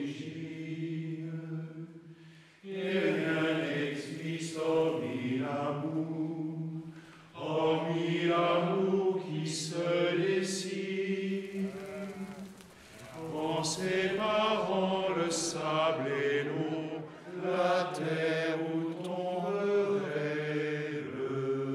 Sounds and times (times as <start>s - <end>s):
Chant: 0.0s - 21.7s.